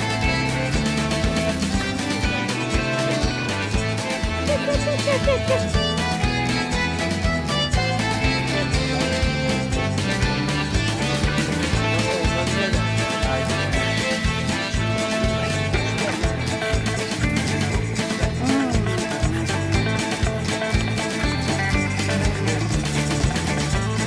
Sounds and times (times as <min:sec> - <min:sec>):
Music: 0:00.0 - 0:24.0
Speech: 0:04.4 - 0:05.8, 0:07.8 - 0:10.6, 0:11.5 - 0:16.8, 0:17.5 - 0:19.4.